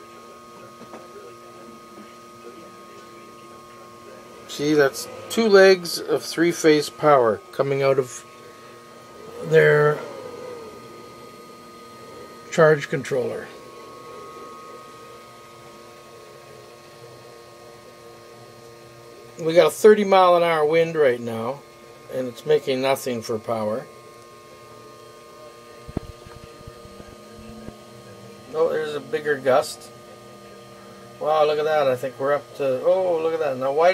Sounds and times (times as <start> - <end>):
Speech: 0.0 - 8.8, 9.4 - 10.2, 12.5 - 15.2, 19.2 - 33.9.